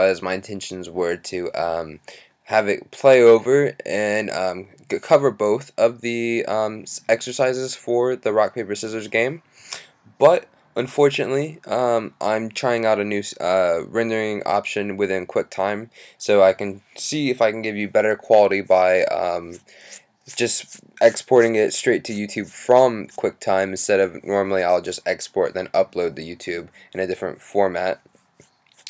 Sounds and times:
Speech: 0.0s - 9.4s, 10.2s - 19.6s, 20.3s - 28.0s.

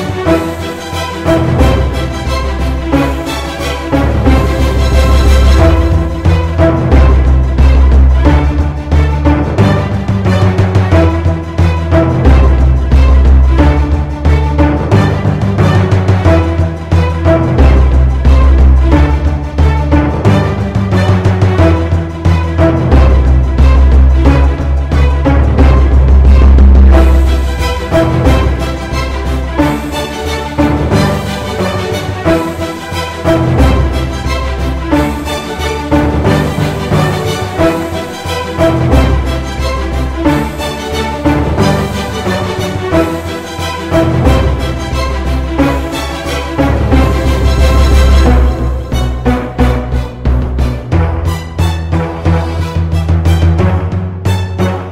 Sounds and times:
Theme music: 0.0s - 54.9s.

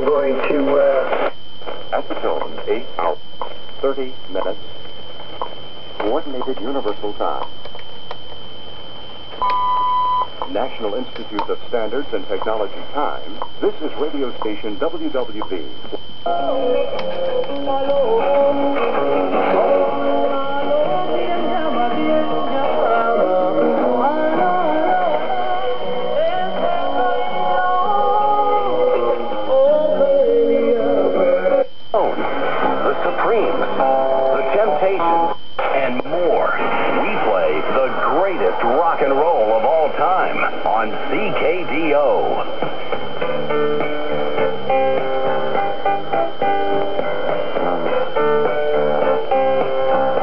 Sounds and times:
Speech: 0.0s - 1.1s, 1.9s - 3.2s, 3.8s - 4.6s, 6.0s - 7.5s, 10.5s - 15.7s, 32.8s - 33.6s, 34.3s - 42.5s
Radio: 0.0s - 9.6s, 10.2s - 45.8s.

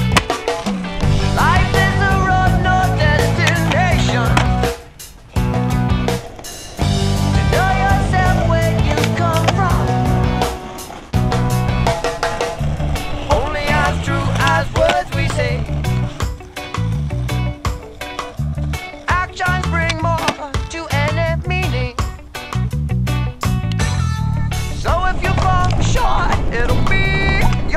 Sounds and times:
Skateboard: 0.0s - 22.7s, 23.7s - 27.7s.

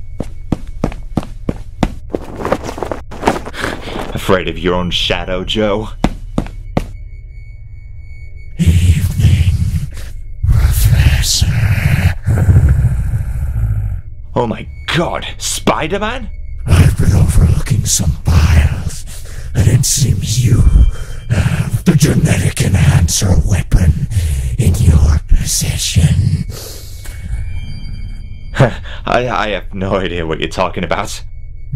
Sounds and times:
Speech: 4.1s - 6.0s, 8.6s - 12.4s, 14.4s - 27.2s, 28.6s - 31.2s.

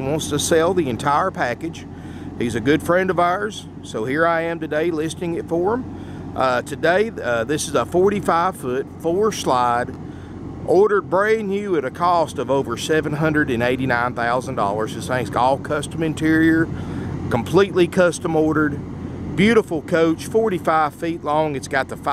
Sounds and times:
Speech: 0.0s - 10.0s, 10.6s - 22.1s.

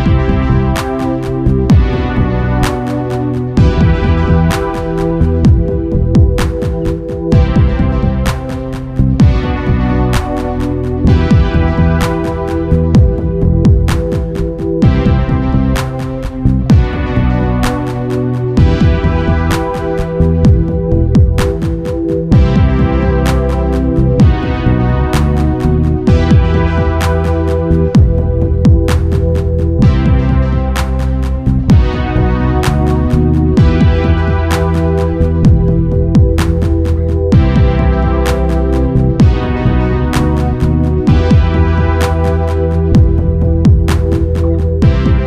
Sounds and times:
Music: 0.0s - 45.2s.

